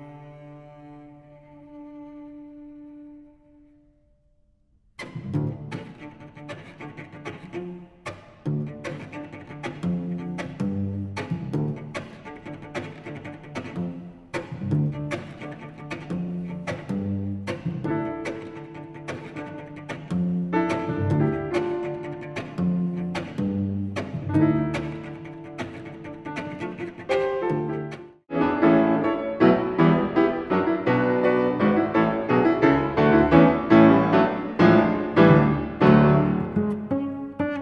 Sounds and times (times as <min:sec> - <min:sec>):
Cello: 0:00.0 - 0:04.3, 0:05.0 - 0:37.6.